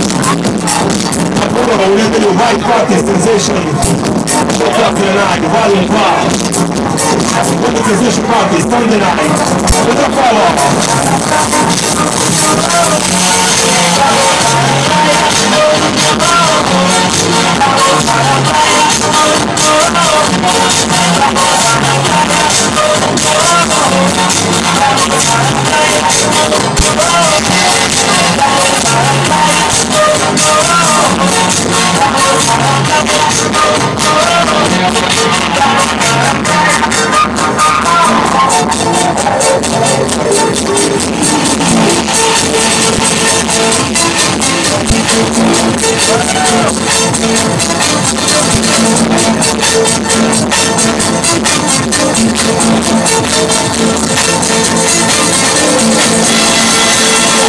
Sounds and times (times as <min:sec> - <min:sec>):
House music: 0:00.0 - 0:57.4.